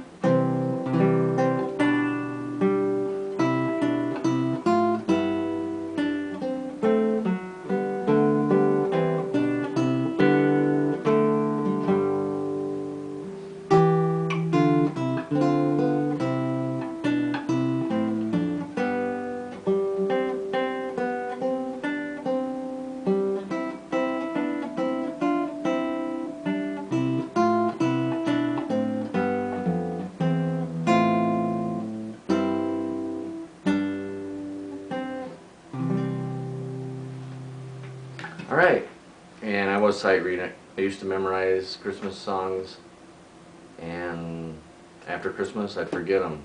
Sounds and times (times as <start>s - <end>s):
Strum: 0.0s - 42.7s
Acoustic guitar: 0.0s - 42.8s.